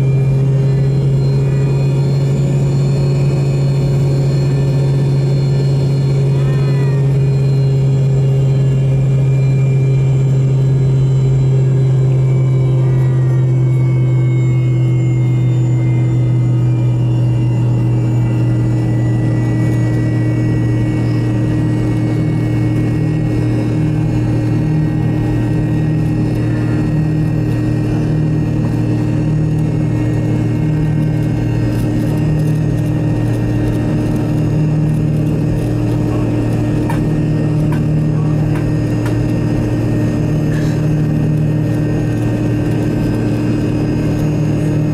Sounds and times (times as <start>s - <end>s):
Aircraft: 0.0s - 44.9s
Heavy engine (low frequency): 0.0s - 44.9s.